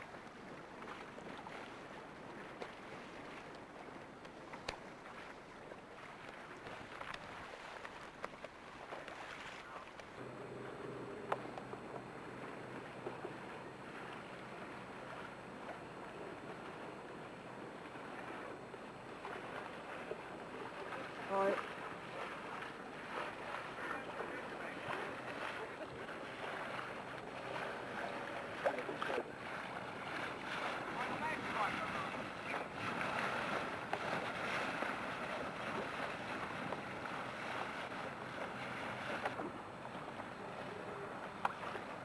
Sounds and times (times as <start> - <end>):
Boat, Water vehicle: 0.0 - 42.0.